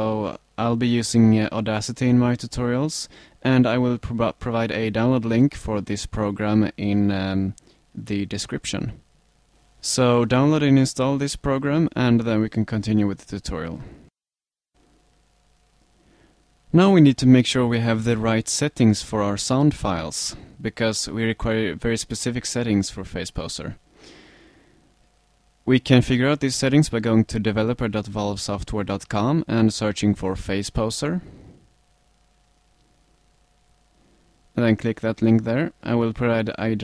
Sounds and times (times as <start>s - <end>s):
Speech: 0.0s - 9.0s, 9.8s - 14.0s, 16.7s - 23.8s, 25.7s - 31.3s, 34.6s - 36.8s.